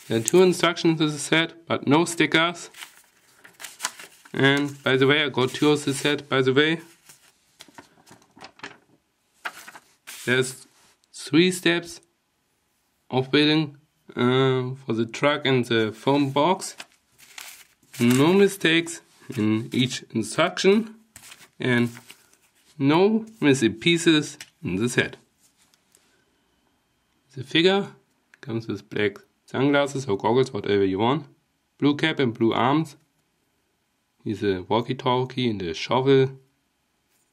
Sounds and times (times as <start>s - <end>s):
Speech: 0.0s - 2.8s, 4.3s - 6.9s, 10.3s - 12.1s, 13.1s - 16.8s, 18.0s - 21.0s, 21.6s - 22.0s, 22.8s - 25.3s, 27.3s - 33.1s, 34.2s - 36.5s.